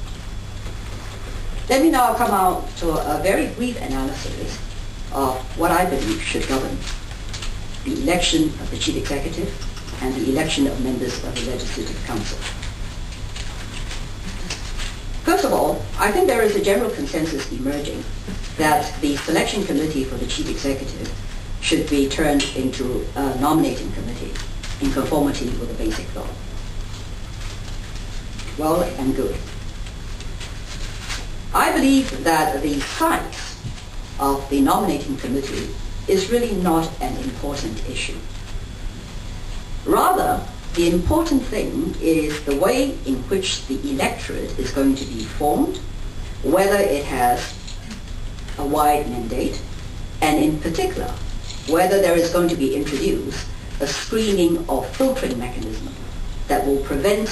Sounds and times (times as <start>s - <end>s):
Speech: 1.7s - 6.9s, 7.9s - 12.6s, 15.3s - 26.4s, 28.5s - 29.5s, 31.6s - 33.6s, 34.2s - 38.3s, 39.9s - 45.9s, 46.5s - 48.0s, 48.6s - 57.3s.